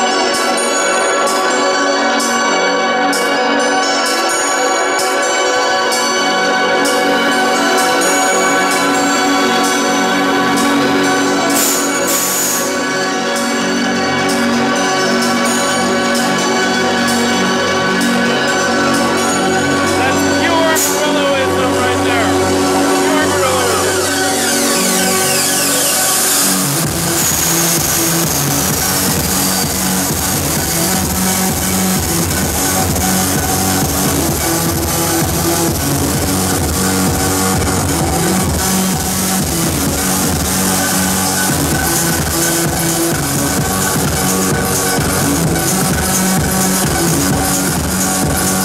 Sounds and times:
Music: 0:00.0 - 0:48.6
Speech: 0:20.0 - 0:24.1.

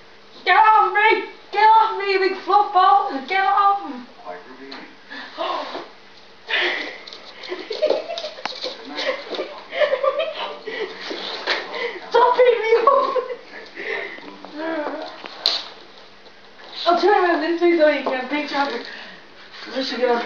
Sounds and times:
Speech: 0:16.8 - 0:18.9.

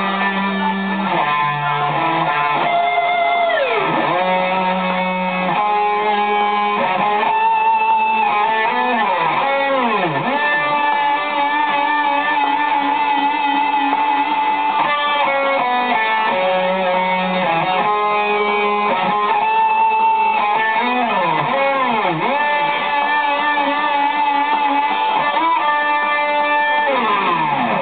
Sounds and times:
Strum: 0:00.0 - 0:27.8.

